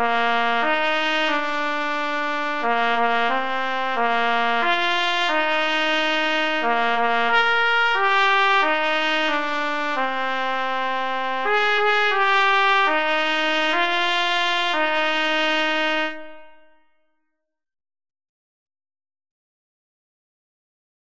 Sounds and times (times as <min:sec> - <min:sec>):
Trumpet: 0:00.0 - 0:17.0.